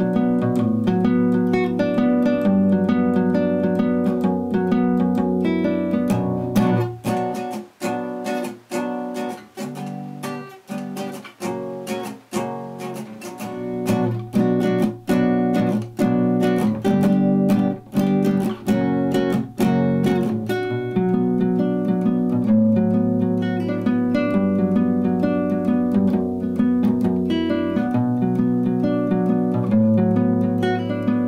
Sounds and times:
Acoustic guitar: 0.0s - 31.2s
Electric guitar: 0.0s - 31.2s
Strum: 0.0s - 31.2s.

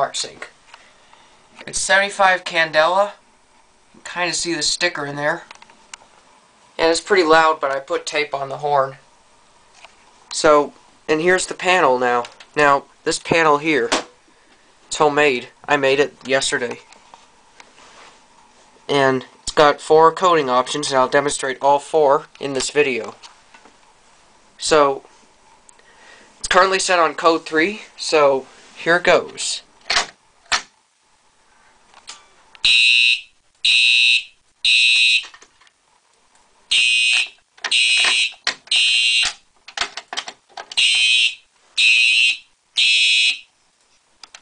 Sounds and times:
Fire alarm: 32.6s - 35.4s, 36.7s - 39.4s, 40.8s - 43.5s.

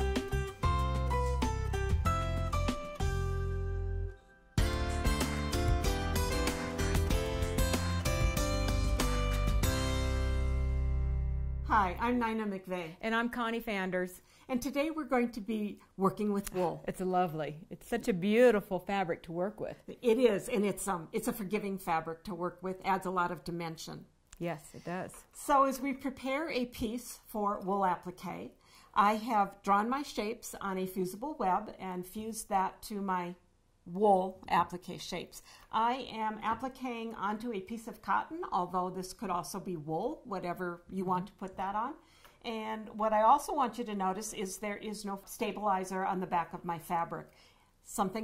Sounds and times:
Speech: 11.7s - 28.4s.

